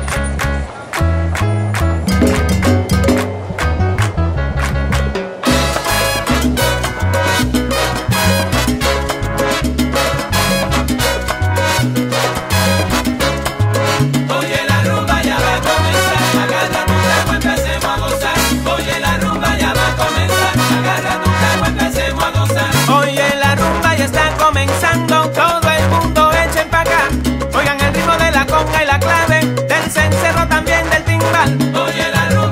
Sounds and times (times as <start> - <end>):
Music: 0.0 - 32.5.